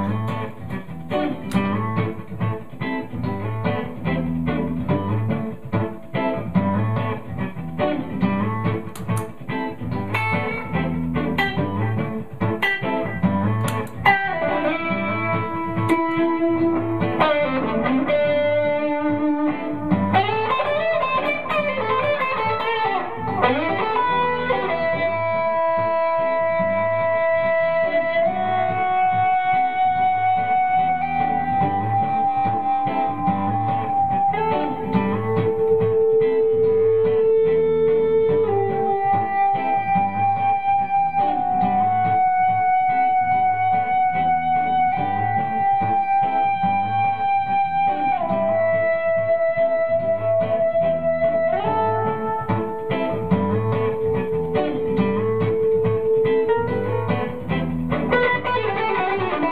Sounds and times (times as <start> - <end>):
Electric guitar: 0.0 - 59.5
Strum: 0.0 - 59.5.